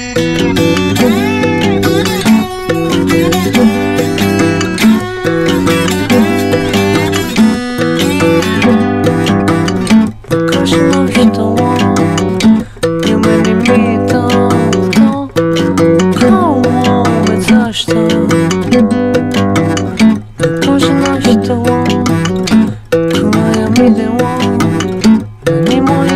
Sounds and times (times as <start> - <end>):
Music: 0.0 - 26.1.